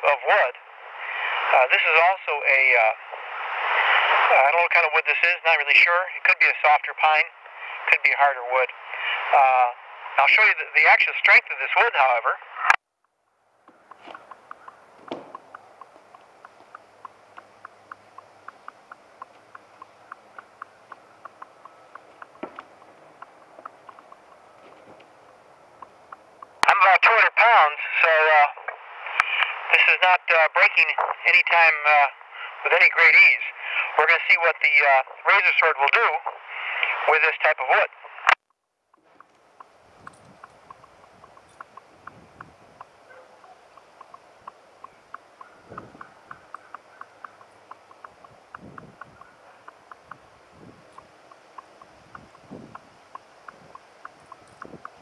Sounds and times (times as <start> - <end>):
Speech: 0.0 - 0.6, 1.5 - 3.0, 4.2 - 12.4, 26.6 - 38.1.